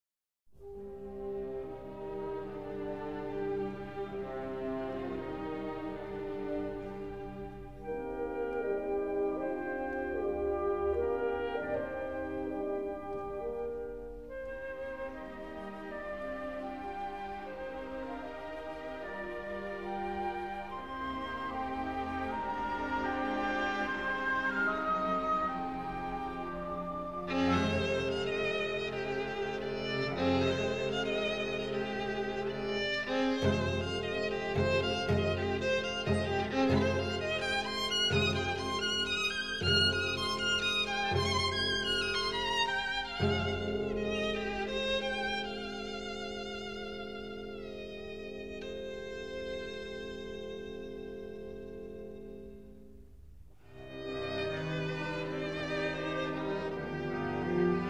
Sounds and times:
Cello: 0.6 - 57.8
Violin, fiddle: 14.8 - 52.4, 53.8 - 57.8.

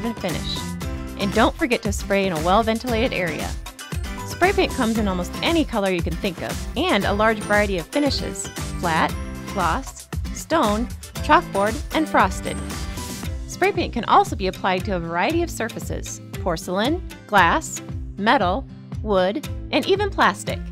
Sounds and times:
Speech: 0.0 - 0.6, 1.2 - 3.6, 4.3 - 12.6, 13.5 - 20.7
Music: 0.0 - 20.7.

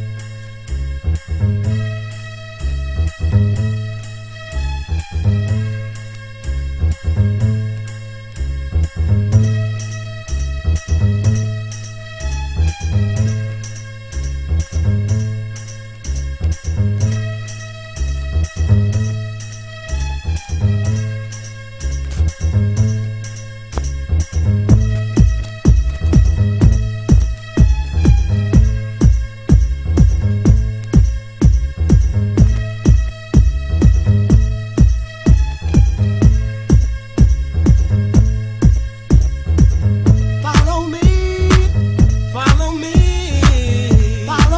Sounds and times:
Music: 0.0 - 44.5.

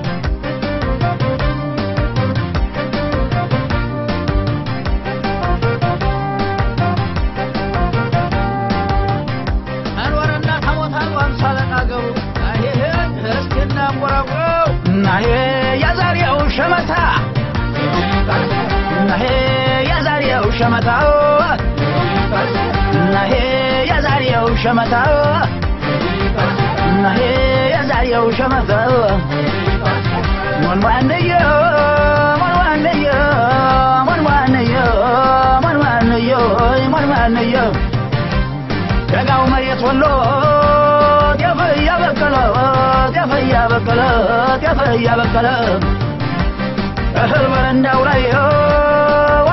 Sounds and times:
Funny music: 0.0 - 49.5.

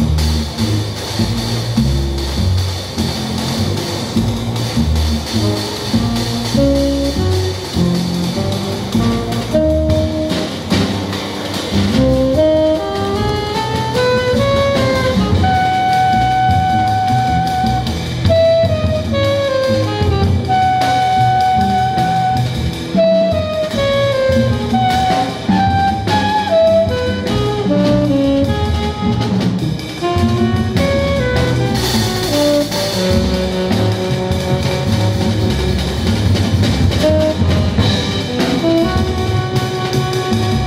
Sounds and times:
Jazz: 0.0 - 40.6.

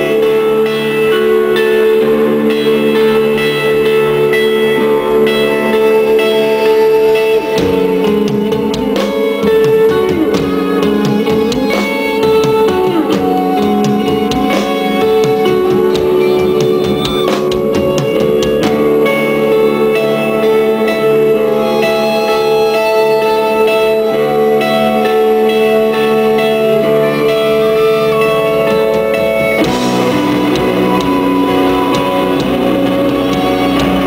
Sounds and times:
Music: 0.0 - 34.0.

